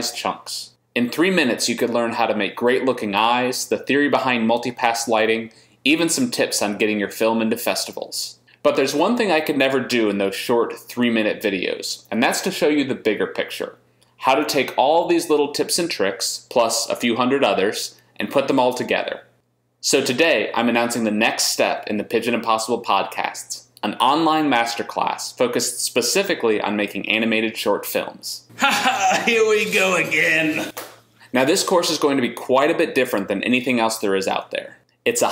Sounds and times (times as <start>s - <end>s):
Speech: 0.0s - 35.3s.